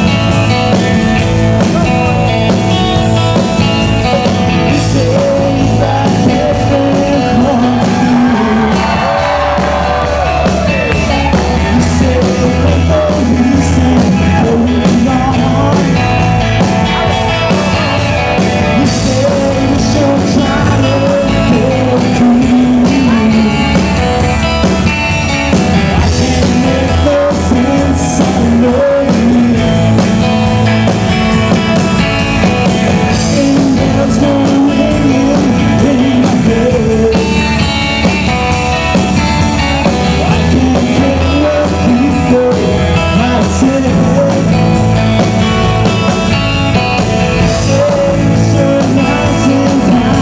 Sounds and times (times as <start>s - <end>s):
Music: 0.0s - 50.2s
Male singing: 4.1s - 10.5s, 11.1s - 16.1s, 18.7s - 23.9s, 25.9s - 30.0s, 33.1s - 37.6s, 40.1s - 44.8s, 47.4s - 50.2s.